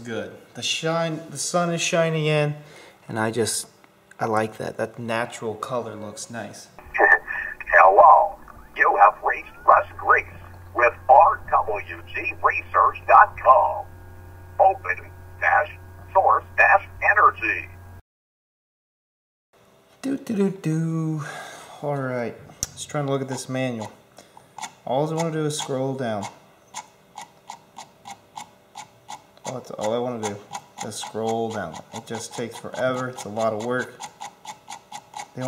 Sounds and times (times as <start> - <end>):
Speech: 0.0 - 13.9, 14.6 - 17.7, 20.0 - 24.0, 24.9 - 26.4, 29.5 - 34.0.